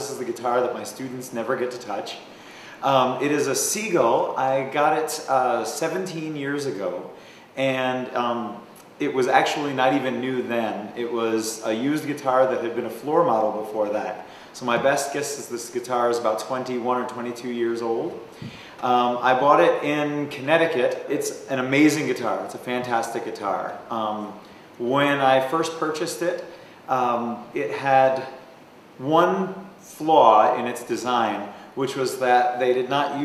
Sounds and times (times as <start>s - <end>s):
Speech: 0.0s - 18.2s, 18.8s - 28.4s, 29.0s - 33.2s.